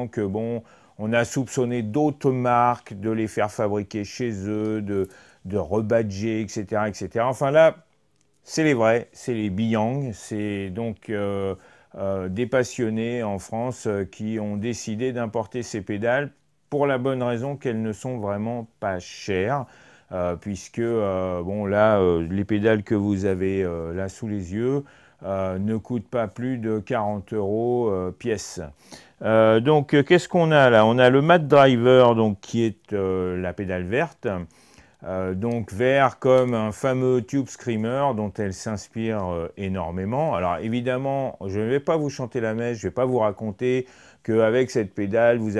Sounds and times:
Speech: 0:00.0 - 0:45.5.

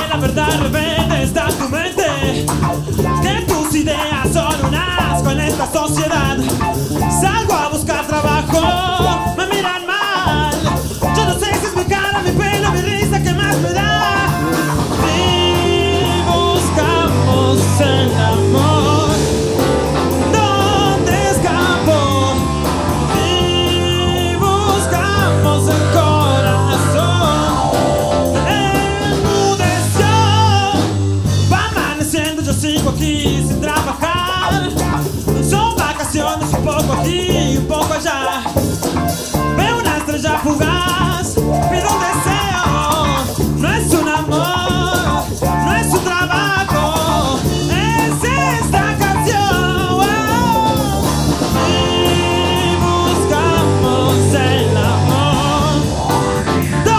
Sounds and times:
Disco: 0:00.0 - 0:56.9
Exciting music: 0:18.0 - 0:29.8.

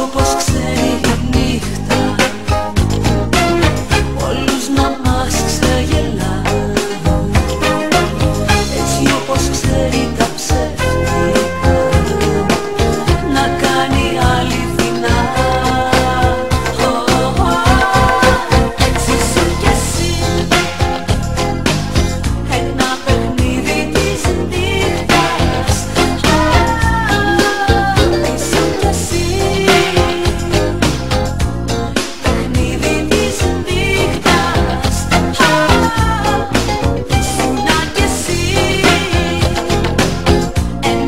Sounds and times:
Electronic music: 0:00.0 - 0:41.0
Pop music: 0:00.0 - 0:41.0.

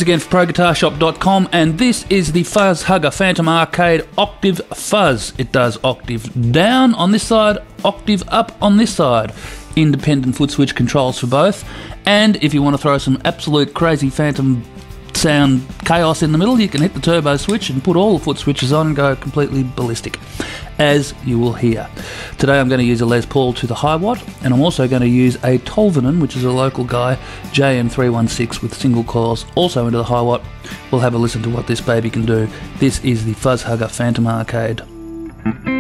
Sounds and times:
Speech: 0:00.0 - 0:20.2, 0:20.8 - 0:34.9.

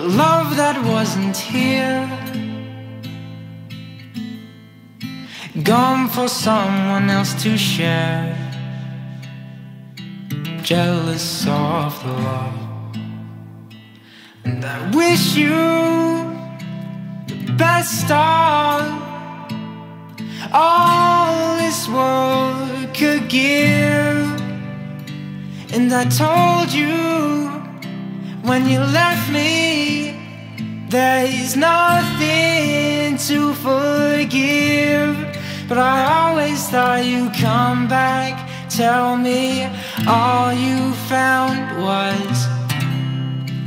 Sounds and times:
Guitar: 0:00.0 - 0:43.6.

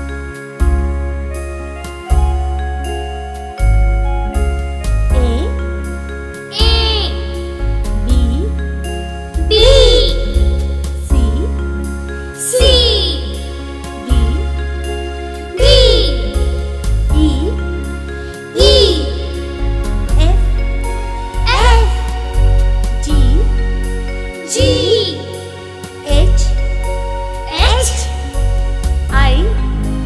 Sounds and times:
Music for children: 0:00.0 - 0:30.0
Speech: 0:05.1 - 0:05.6, 0:06.6 - 0:07.2, 0:08.1 - 0:08.6, 0:09.5 - 0:10.3, 0:11.1 - 0:11.6, 0:17.2 - 0:17.6, 0:18.6 - 0:19.2, 0:20.2 - 0:20.5, 0:21.5 - 0:22.0, 0:23.0 - 0:23.5, 0:24.5 - 0:25.2, 0:26.0 - 0:26.6, 0:27.5 - 0:28.2, 0:29.1 - 0:30.0.

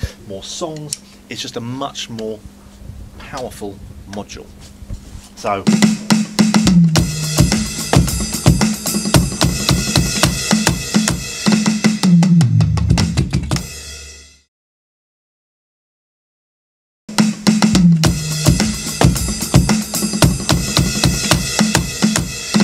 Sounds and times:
Drum: 0:05.4 - 0:14.1, 0:17.1 - 0:22.6
Drum kit: 0:05.4 - 0:14.5, 0:17.1 - 0:22.6.

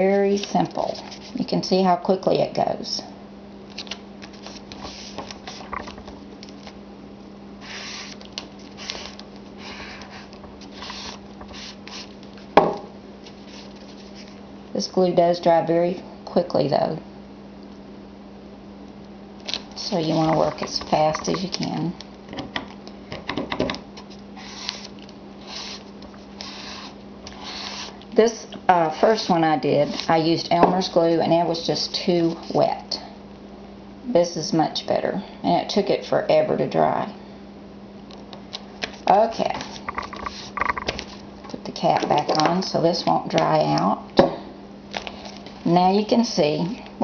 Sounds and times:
Speech: 0:00.0 - 0:03.1, 0:14.8 - 0:17.0, 0:19.8 - 0:22.0, 0:28.2 - 0:33.1, 0:34.1 - 0:37.2, 0:39.1 - 0:39.7, 0:41.5 - 0:44.1, 0:45.6 - 0:46.8.

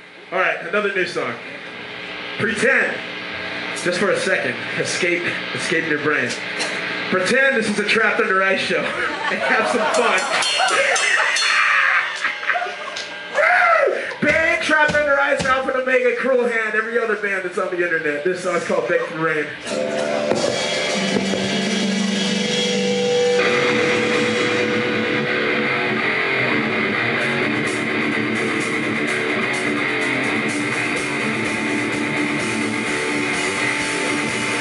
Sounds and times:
Speech: 0:00.3 - 0:01.5, 0:02.4 - 0:03.0, 0:03.8 - 0:06.4, 0:07.1 - 0:10.3, 0:14.2 - 0:19.6.

